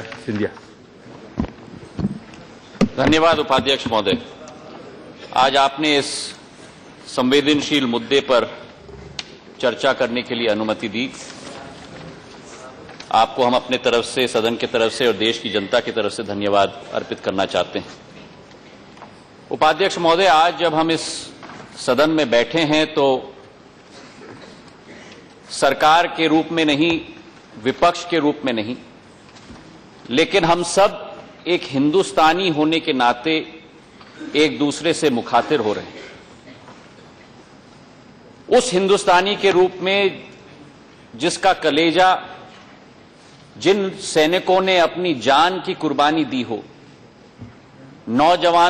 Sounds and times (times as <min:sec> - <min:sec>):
Male speech, man speaking: 0:00.0 - 0:00.6, 0:03.0 - 0:06.4, 0:07.1 - 0:08.7, 0:09.6 - 0:11.8, 0:12.5 - 0:17.9, 0:19.5 - 0:23.3, 0:25.5 - 0:28.9, 0:30.1 - 0:33.6, 0:34.3 - 0:36.0, 0:38.5 - 0:40.3, 0:41.2 - 0:42.4, 0:43.6 - 0:46.7, 0:48.1 - 0:48.7
Narration, monologue: 0:00.0 - 0:48.7.